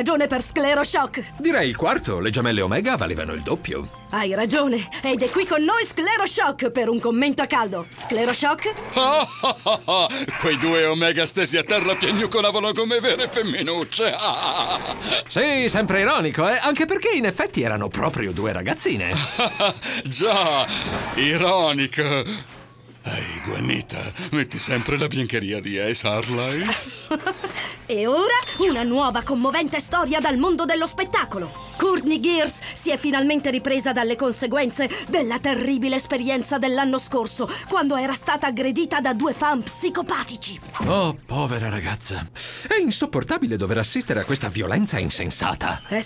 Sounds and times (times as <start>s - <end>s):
Music: 0.0s - 46.0s
Speech: 10.3s - 14.1s, 23.1s - 26.9s.